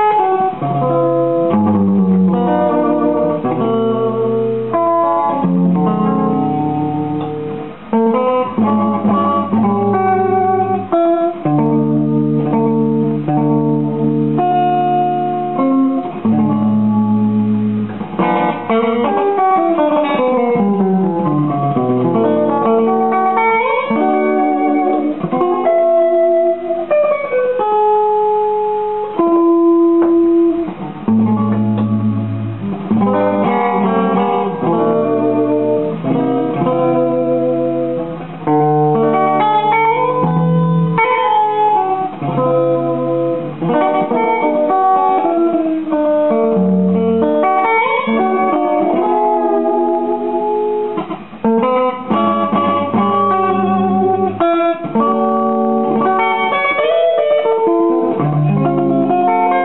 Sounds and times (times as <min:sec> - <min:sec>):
Electric guitar: 0:00.0 - 0:59.6.